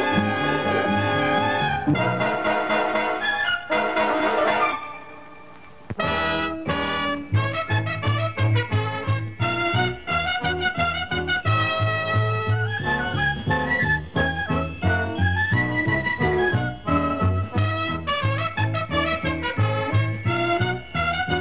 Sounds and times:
Music: 0.0s - 21.4s.

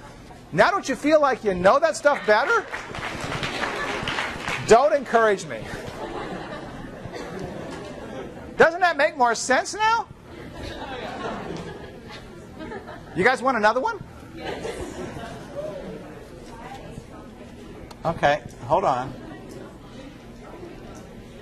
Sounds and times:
Speech: 0.5s - 2.7s, 4.6s - 5.7s, 8.6s - 10.1s.

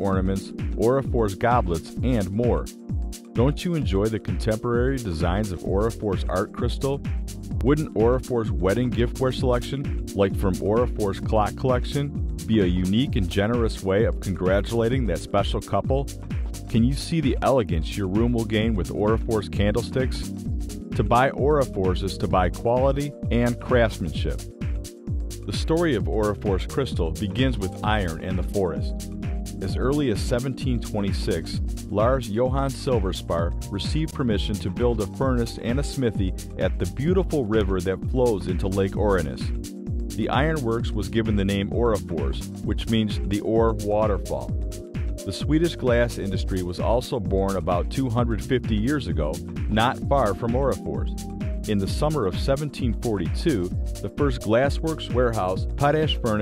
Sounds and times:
Speech: 0.0s - 2.7s, 3.4s - 7.0s, 7.6s - 16.1s, 16.7s - 20.3s, 21.0s - 24.4s, 25.5s - 29.0s, 29.6s - 39.6s, 40.2s - 44.5s, 45.2s - 56.4s
Music: 0.0s - 56.4s.

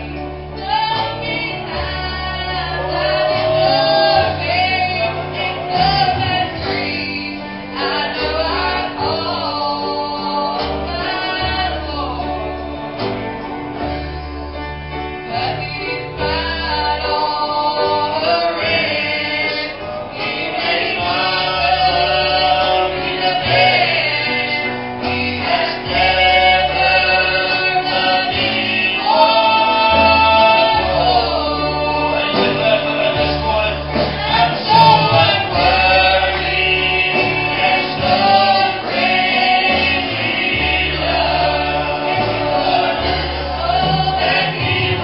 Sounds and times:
Singing: 0.0s - 13.2s, 15.3s - 45.0s
Inside, public space: 0.0s - 45.0s
Music: 0.0s - 45.0s.

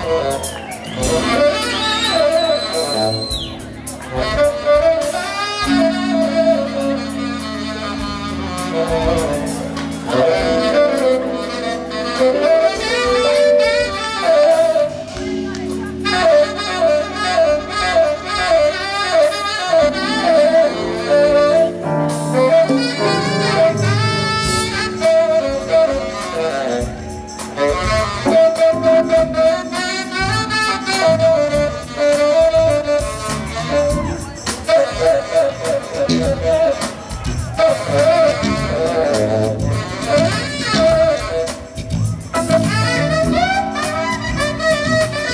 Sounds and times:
Music: 0.0s - 45.3s
Speech: 15.2s - 16.3s.

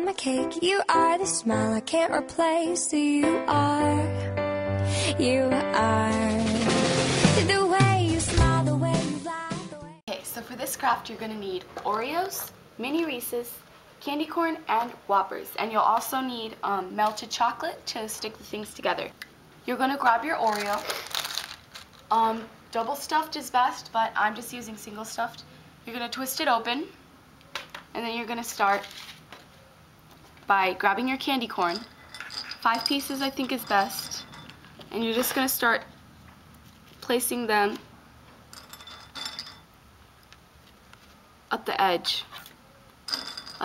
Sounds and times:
Speech: 10.1s - 20.9s, 22.1s - 27.0s, 28.0s - 28.9s, 30.5s - 31.9s, 32.6s - 34.2s, 34.9s - 35.9s, 37.0s - 37.8s, 41.5s - 42.4s.

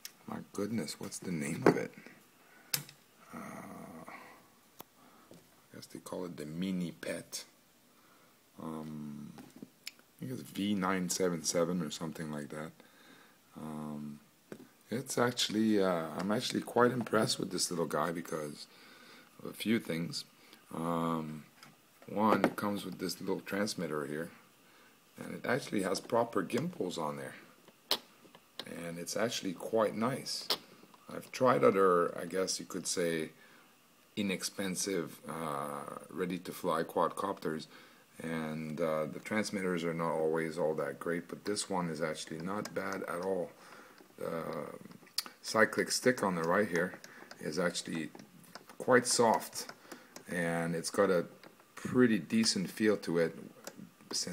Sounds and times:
Inside, small room: 0.0s - 54.3s
Speech: 0.3s - 2.0s, 5.7s - 7.6s, 8.6s - 9.4s, 10.2s - 12.8s, 13.6s - 14.2s, 14.9s - 18.7s, 19.4s - 21.5s, 22.1s - 24.4s, 25.2s - 27.5s, 28.6s - 33.4s, 34.2s - 43.6s, 44.2s - 48.2s, 48.8s - 49.7s, 50.3s - 53.5s, 54.1s - 54.3s.

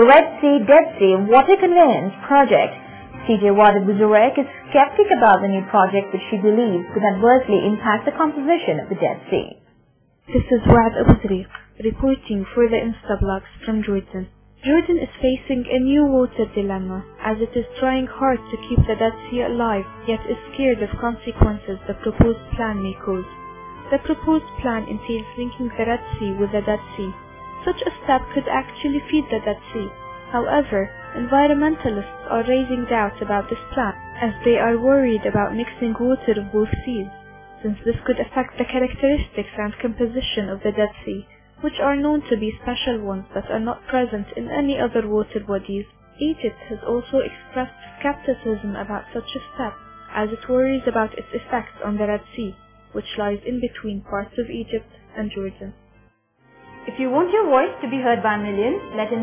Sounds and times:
Speech: 0.0s - 9.6s, 10.3s - 23.3s, 23.9s - 55.7s, 56.9s - 59.2s
Music: 0.0s - 59.2s.

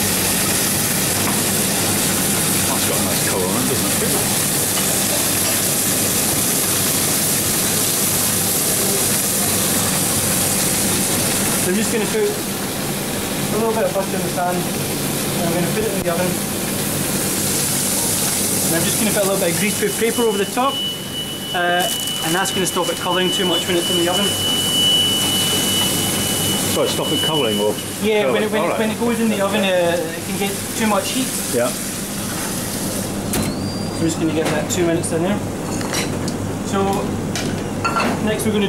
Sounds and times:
Sizzle: 0.0s - 33.3s.

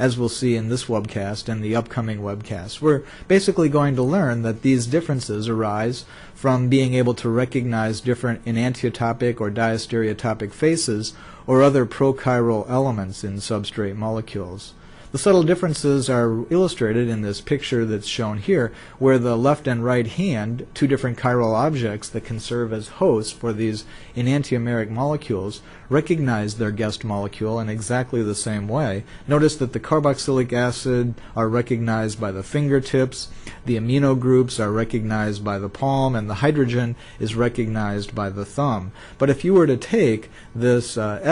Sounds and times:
Narration, monologue: 0.0s - 41.3s.

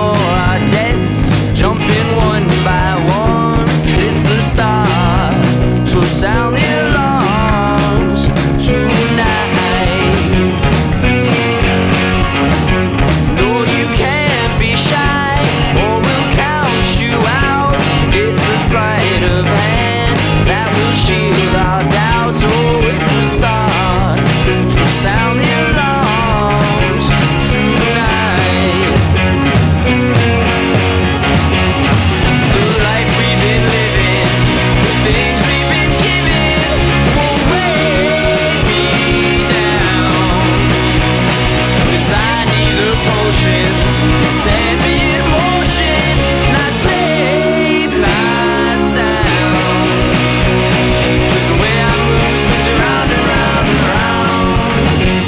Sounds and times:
Music: 0.0s - 55.2s.

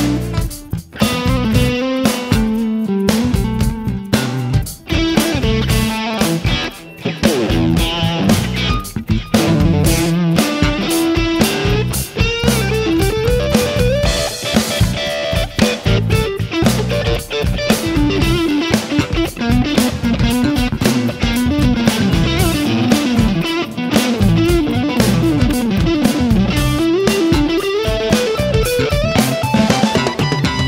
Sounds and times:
Effects unit: 0.0s - 30.6s
Electric guitar: 0.0s - 30.6s.

